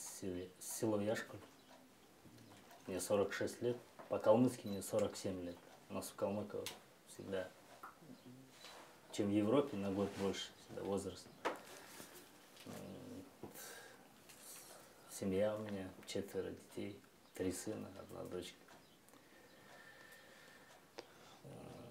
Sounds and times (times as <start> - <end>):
Speech: 0.0 - 1.4, 2.9 - 7.6, 9.1 - 11.3, 15.1 - 18.6.